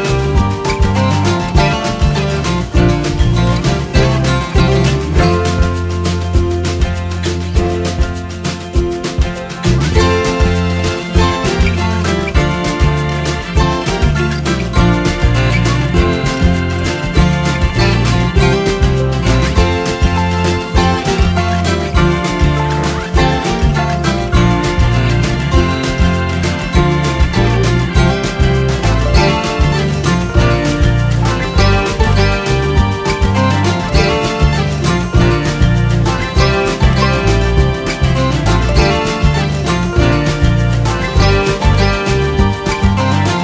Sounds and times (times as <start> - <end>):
Punk rock: 0.0 - 43.4.